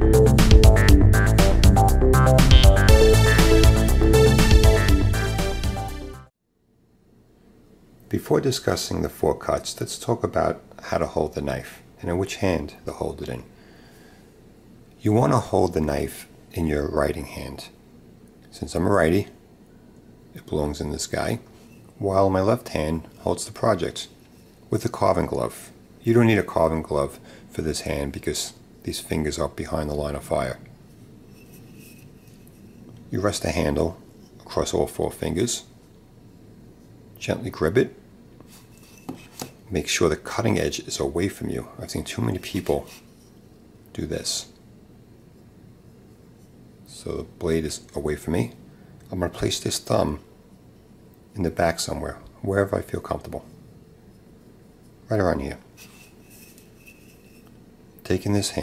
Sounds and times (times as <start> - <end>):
Speech: 8.1 - 13.5, 15.0 - 17.8, 18.5 - 19.4, 20.4 - 30.7, 33.1 - 35.7, 37.2 - 38.0, 39.7 - 43.0, 43.9 - 44.6, 46.9 - 50.3, 51.4 - 53.5, 55.1 - 55.7, 58.0 - 58.6.